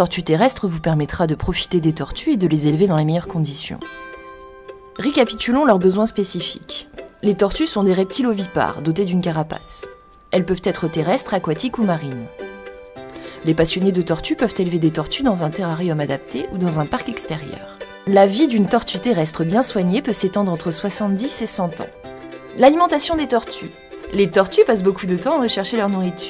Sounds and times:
Speech: 0.0 - 3.8, 5.0 - 12.3, 13.4 - 21.9, 22.6 - 26.2
Music: 0.0 - 26.2.

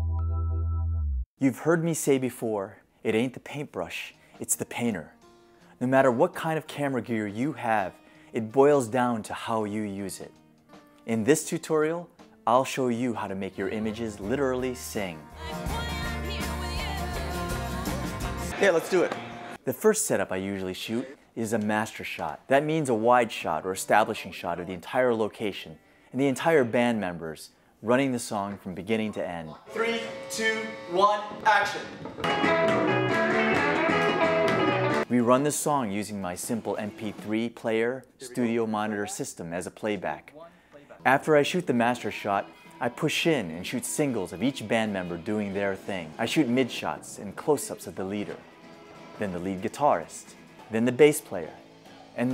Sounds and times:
Speech: 1.4 - 5.1, 5.8 - 10.3, 11.1 - 15.2, 18.5 - 31.9, 35.1 - 48.4, 49.2 - 51.6.

